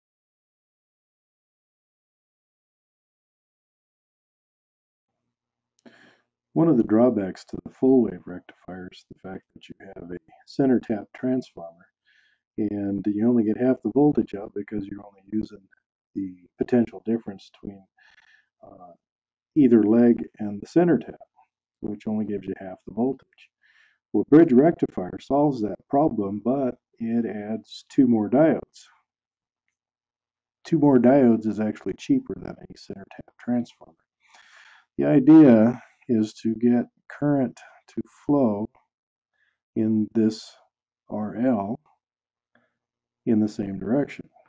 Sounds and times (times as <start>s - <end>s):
Speech: 6.6s - 11.8s, 12.6s - 15.6s, 16.2s - 17.9s, 18.6s - 18.9s, 19.6s - 21.2s, 21.8s - 23.5s, 24.2s - 28.9s, 30.7s - 38.7s, 39.8s - 41.8s, 43.3s - 44.3s.